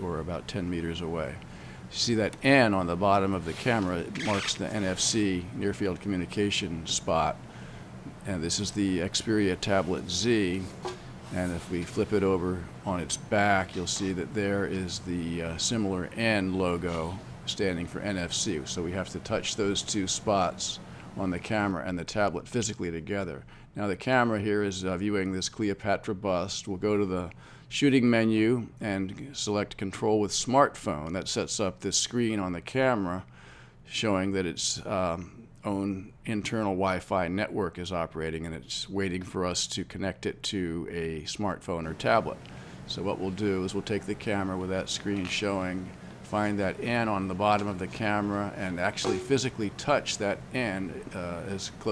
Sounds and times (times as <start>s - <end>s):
Speech: 0.0s - 7.4s, 8.2s - 33.3s, 33.9s - 51.9s.